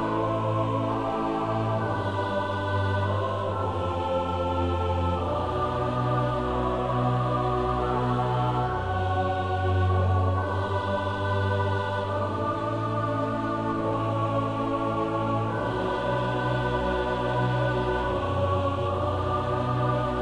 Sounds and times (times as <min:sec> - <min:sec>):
New-age music: 0:00.0 - 0:20.2
Soul music: 0:00.0 - 0:20.2.